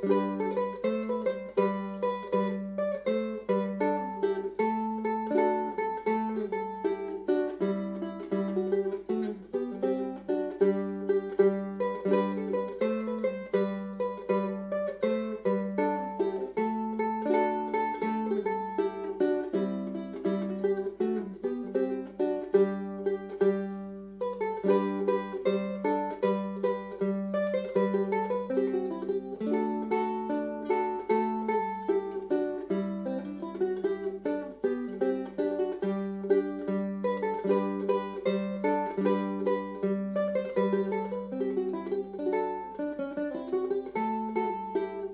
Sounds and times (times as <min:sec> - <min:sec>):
Acoustic guitar: 0:00.0 - 0:45.1
Strum: 0:00.0 - 0:45.1.